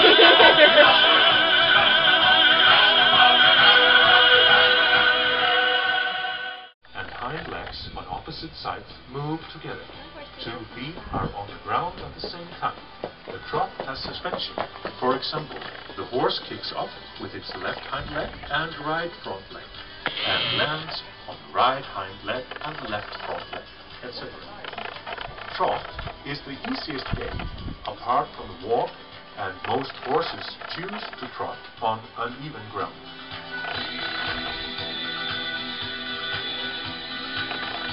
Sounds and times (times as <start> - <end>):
Music: 0.0 - 37.9
Speech: 6.9 - 24.8, 25.5 - 33.0
Clip-clop: 10.9 - 16.4, 22.5 - 28.0.